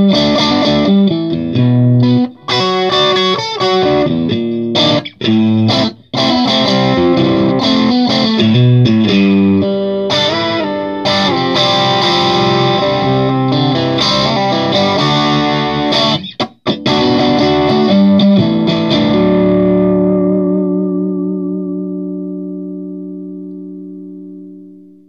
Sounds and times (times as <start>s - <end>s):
Music: 0.0s - 25.0s.